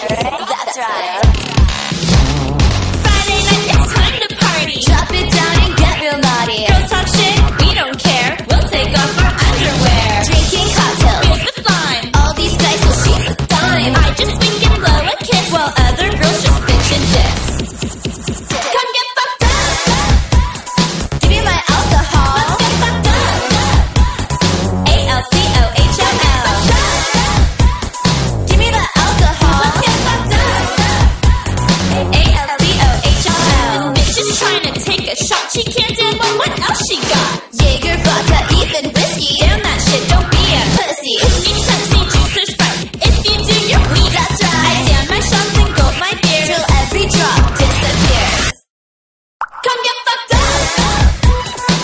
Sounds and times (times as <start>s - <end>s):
Music: 0.0s - 48.7s, 49.8s - 51.8s.